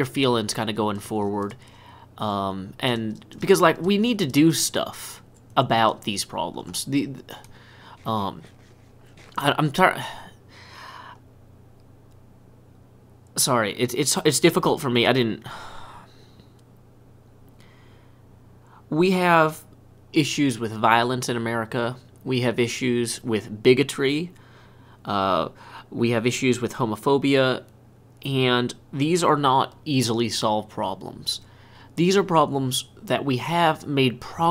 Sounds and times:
Speech: 0.0 - 1.6, 2.2 - 8.5, 9.3 - 10.3, 13.4 - 15.5, 18.9 - 24.4, 25.0 - 34.5.

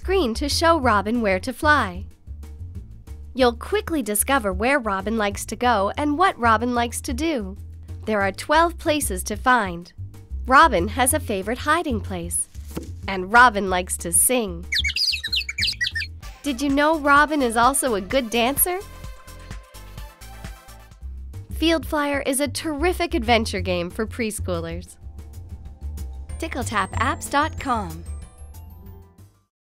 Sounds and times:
Speech: 0.0 - 2.1, 3.4 - 9.9, 10.5 - 12.5, 13.1 - 14.7, 16.5 - 18.9, 21.6 - 25.0, 26.4 - 28.1
Music: 0.0 - 29.5.

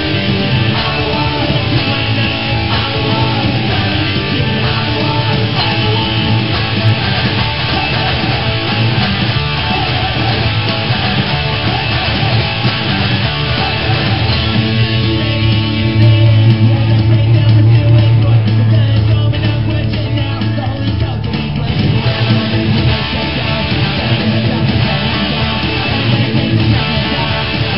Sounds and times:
Bass guitar: 0.0 - 27.7.

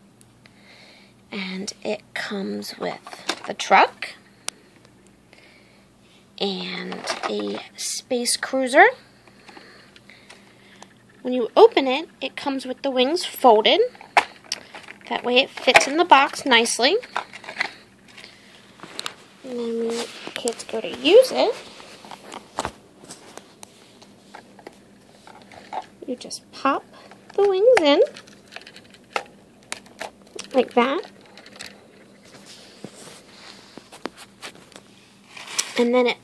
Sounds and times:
Speech: 1.3 - 4.2, 6.4 - 9.0, 11.2 - 14.0, 15.1 - 17.0, 19.4 - 21.6, 26.0 - 28.1, 30.4 - 31.1, 35.8 - 36.2.

